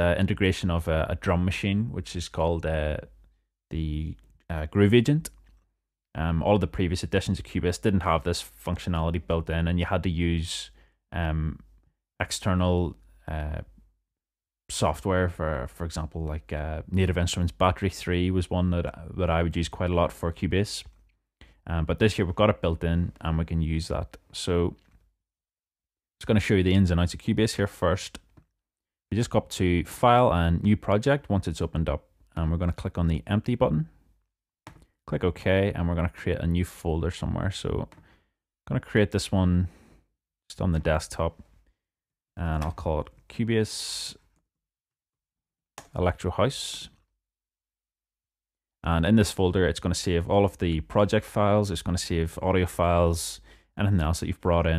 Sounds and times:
Speech: 0.0 - 5.4, 6.2 - 13.8, 14.7 - 21.0, 21.6 - 24.9, 26.2 - 28.3, 29.1 - 34.0, 35.1 - 38.0, 38.7 - 39.7, 40.5 - 41.4, 42.4 - 44.2, 45.9 - 47.1, 48.8 - 54.7.

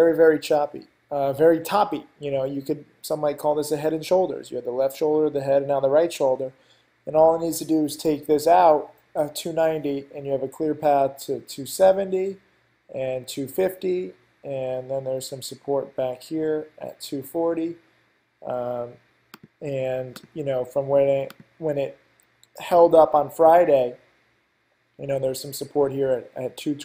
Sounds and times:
Speech: 0.0 - 17.8, 18.4 - 19.0, 19.6 - 24.0, 25.0 - 26.8.

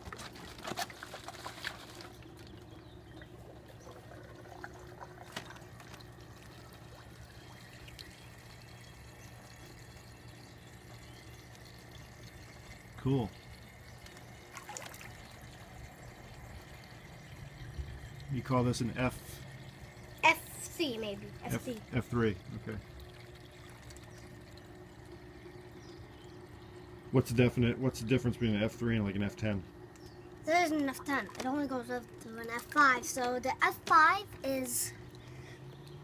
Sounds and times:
Speech: 18.3 - 19.3, 27.2 - 29.7.

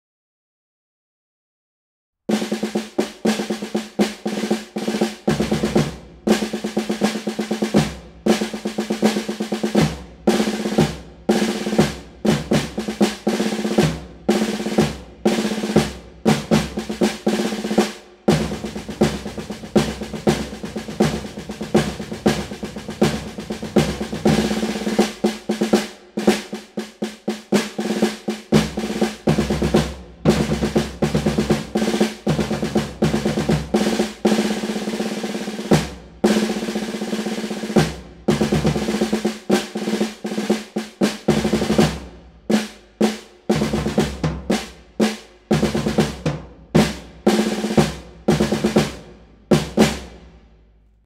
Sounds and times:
Drum roll: 2.3 - 50.5.

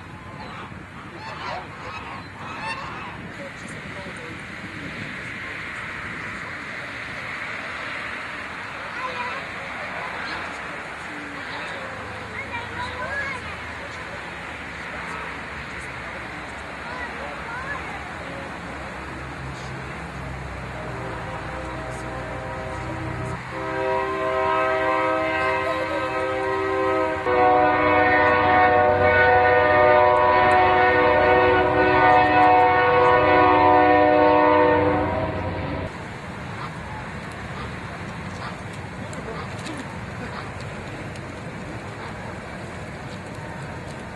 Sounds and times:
Speech: 8.8 - 20.0.

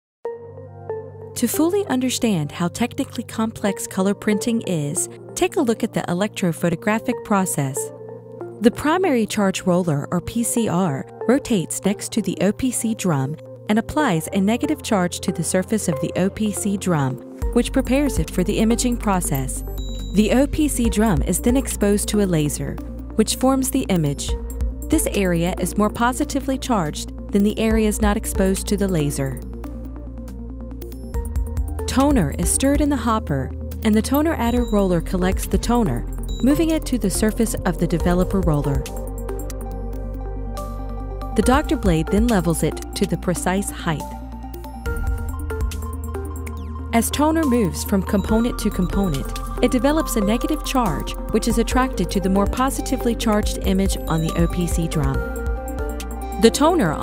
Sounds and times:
Music: 0.2 - 57.0
Speech: 1.4 - 7.9, 8.6 - 19.6, 20.2 - 24.3, 24.9 - 29.4, 31.9 - 38.9, 41.4 - 44.1, 47.0 - 55.2, 56.4 - 57.0.

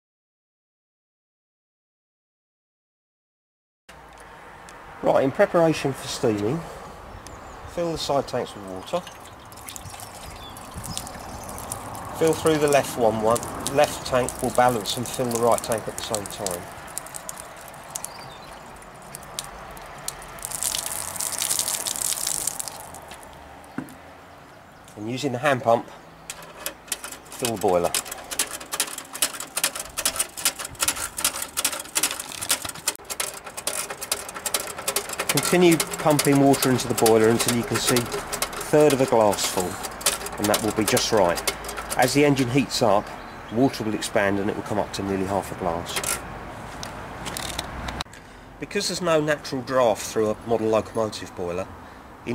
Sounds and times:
Speech: 5.0 - 6.7, 7.7 - 9.1, 12.2 - 16.7, 25.0 - 26.0, 27.4 - 28.0, 35.3 - 39.8, 40.4 - 41.4, 42.0 - 46.0, 48.6 - 51.7.

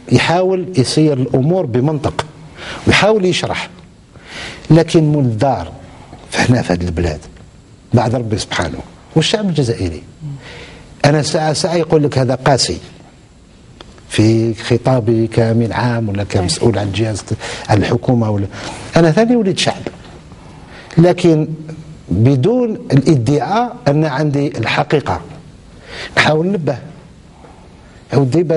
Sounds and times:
Speech: 0.1 - 2.3, 2.9 - 3.8, 4.7 - 7.3, 7.9 - 10.4, 11.0 - 13.0, 14.1 - 20.0, 21.0 - 25.4, 26.2 - 26.9, 28.1 - 28.5.

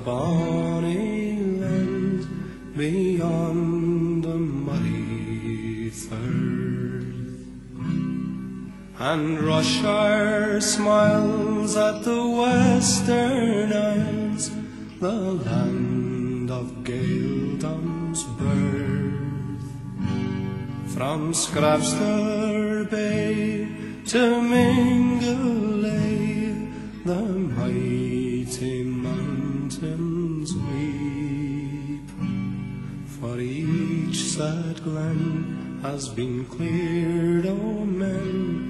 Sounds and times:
Music: 0.0 - 38.6.

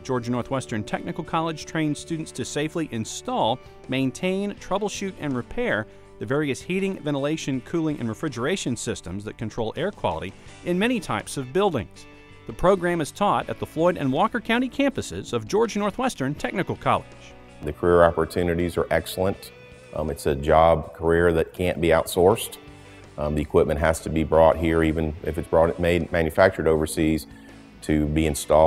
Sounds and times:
Speech: 0.0 - 22.6, 23.2 - 28.6
Music: 0.0 - 28.6.

